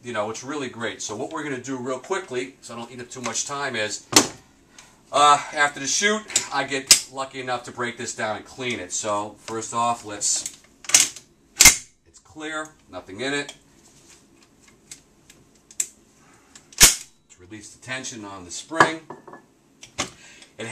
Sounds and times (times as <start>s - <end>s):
Speech: 0.0s - 4.1s, 5.1s - 10.5s, 12.1s - 13.6s, 17.3s - 19.1s.